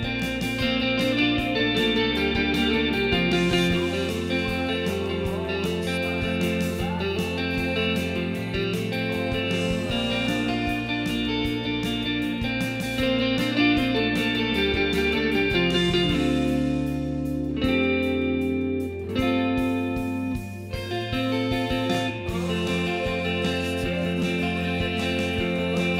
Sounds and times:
Guitar: 0:00.0 - 0:25.9.

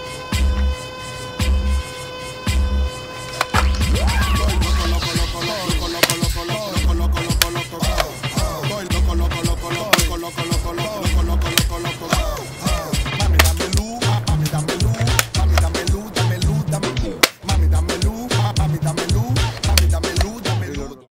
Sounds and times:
Music: 0:00.0 - 0:21.1.

